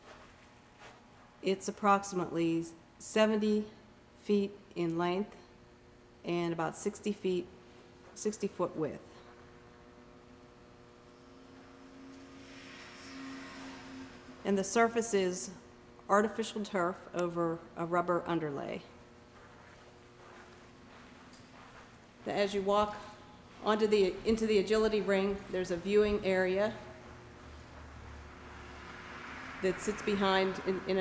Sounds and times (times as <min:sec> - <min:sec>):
Speech: 0:01.4 - 0:05.5, 0:06.2 - 0:07.5, 0:08.2 - 0:09.2, 0:14.4 - 0:18.9, 0:22.2 - 0:27.0, 0:29.6 - 0:31.0.